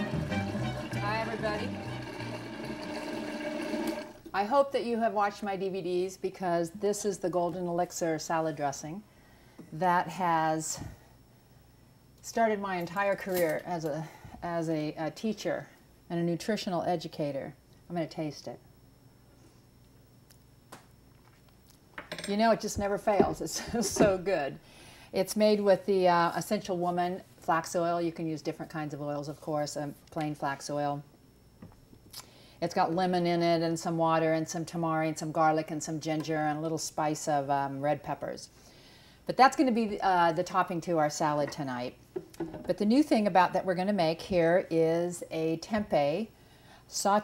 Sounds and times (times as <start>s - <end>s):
Speech: 1.0s - 1.7s, 4.3s - 9.0s, 9.8s - 11.0s, 12.2s - 18.6s, 22.3s - 24.6s, 25.2s - 31.1s, 32.6s - 38.5s, 39.3s - 42.0s, 42.7s - 46.3s, 46.9s - 47.2s.